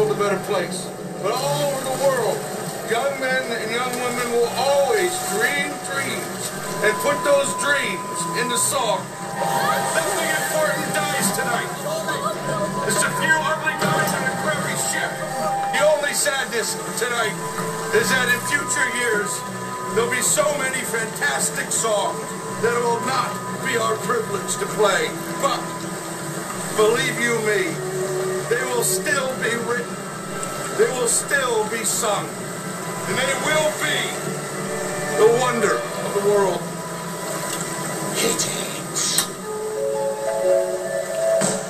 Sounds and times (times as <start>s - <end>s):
Speech: 0.0s - 9.0s, 9.6s - 19.4s, 20.0s - 25.7s, 26.8s - 27.8s, 28.5s - 29.9s, 30.8s - 32.3s, 33.1s - 34.2s, 35.2s - 36.7s, 38.2s - 39.3s
Music: 0.0s - 41.7s.